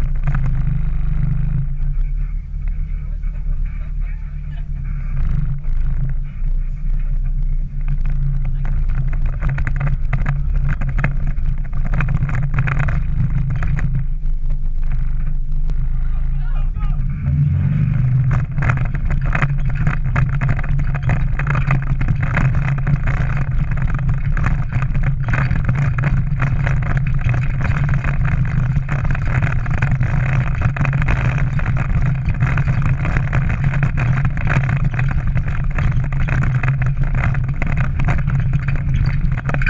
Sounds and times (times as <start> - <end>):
Vehicle: 0.0 - 39.7.